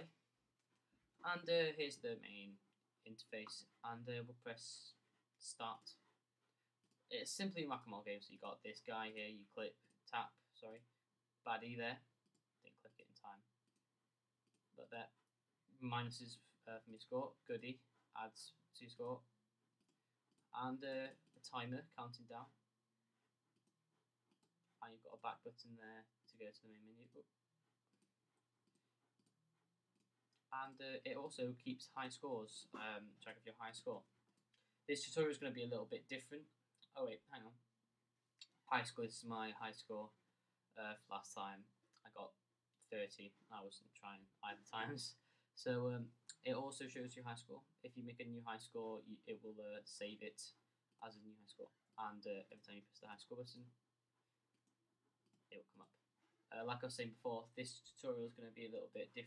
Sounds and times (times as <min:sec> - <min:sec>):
Speech: 0:00.0 - 0:00.2, 0:01.2 - 0:06.0, 0:07.1 - 0:10.9, 0:11.5 - 0:13.5, 0:14.8 - 0:15.2, 0:15.8 - 0:19.3, 0:20.6 - 0:22.6, 0:24.8 - 0:27.3, 0:30.5 - 0:34.1, 0:34.9 - 0:37.6, 0:38.4 - 0:40.2, 0:40.8 - 0:53.8, 0:55.5 - 0:59.2.